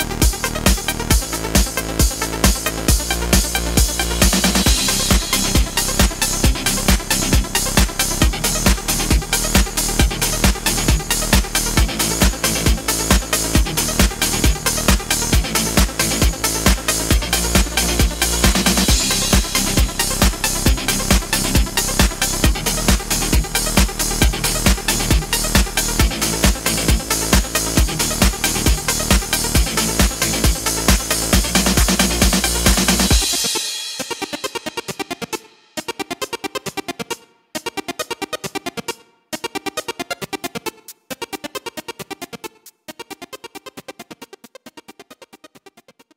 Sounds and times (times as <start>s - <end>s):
Trance music: 0.0s - 45.9s.